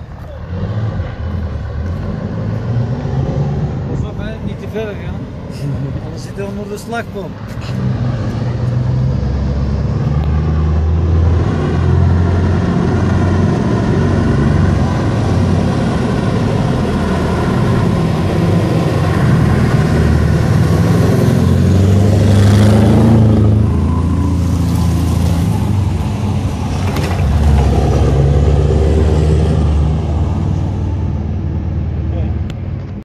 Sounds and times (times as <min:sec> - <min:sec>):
Speech: 0:03.9 - 0:05.2, 0:06.0 - 0:07.4, 0:32.1 - 0:32.4.